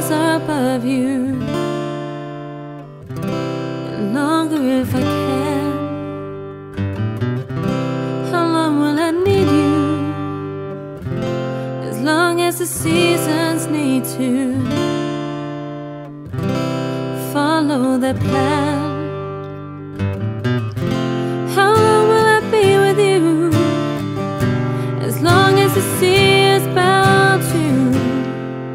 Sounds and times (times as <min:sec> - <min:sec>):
Music: 0:00.0 - 0:28.7.